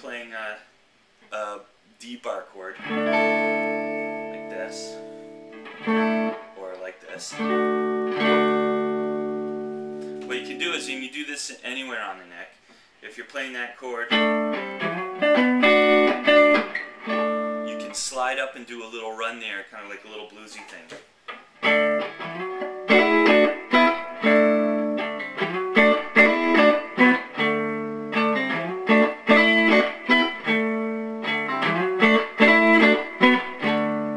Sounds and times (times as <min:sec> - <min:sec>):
Speech: 0:00.0 - 0:00.7, 0:01.3 - 0:02.8, 0:04.3 - 0:05.0, 0:06.6 - 0:07.5, 0:10.3 - 0:14.2, 0:17.7 - 0:21.0
Electric guitar: 0:02.8 - 0:10.8, 0:14.1 - 0:17.7, 0:21.6 - 0:34.1.